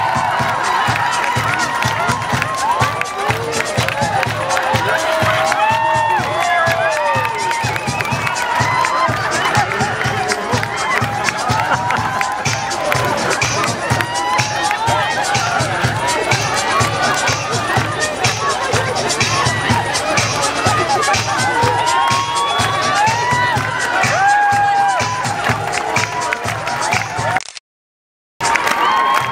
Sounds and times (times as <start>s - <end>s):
Techno: 0.0s - 27.4s.